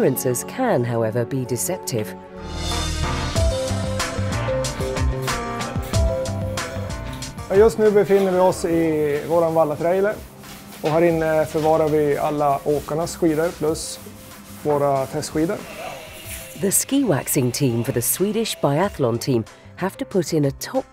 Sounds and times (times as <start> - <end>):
Speech: 7.5 - 10.2, 10.8 - 14.0, 14.6 - 15.6, 16.6 - 20.9.